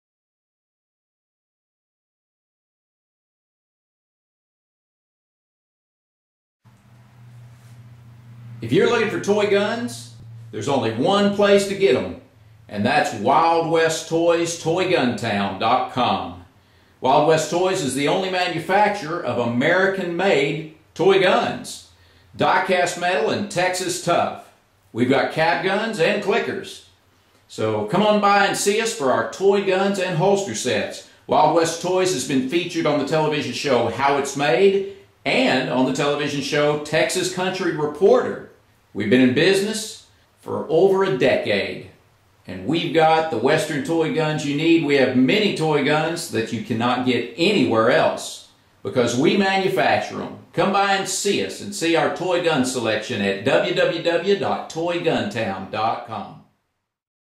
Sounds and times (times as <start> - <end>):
Speech: 8.6 - 26.9, 27.5 - 56.5.